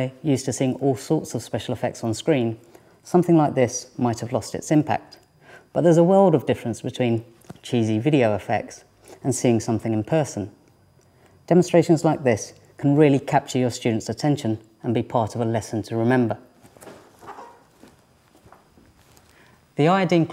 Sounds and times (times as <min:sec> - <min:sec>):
Speech: 0:00.0 - 0:10.6, 0:11.5 - 0:16.5, 0:19.8 - 0:20.3.